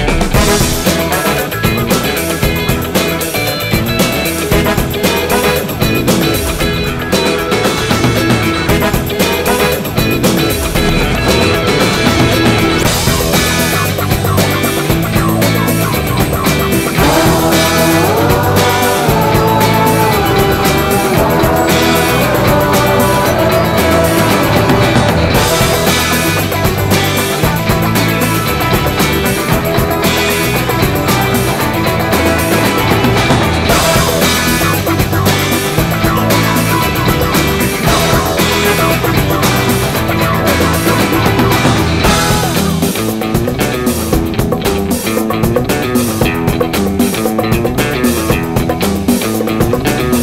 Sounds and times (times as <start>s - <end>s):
Music: 0.0s - 50.2s.